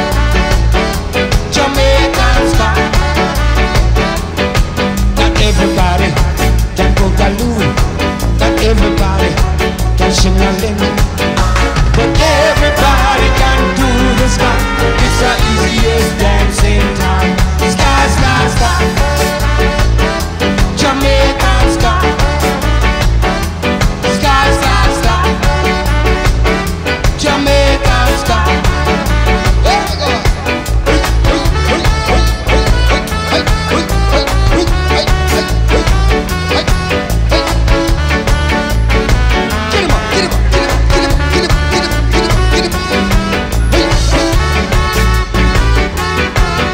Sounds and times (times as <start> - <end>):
Psychedelic rock: 0.0 - 46.7
Ska: 0.0 - 46.7.